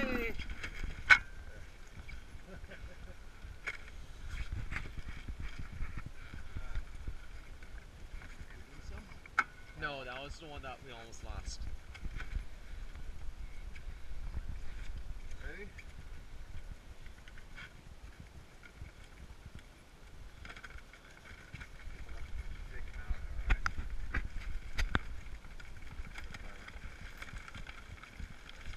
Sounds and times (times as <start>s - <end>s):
Crackle: 0.0s - 28.7s.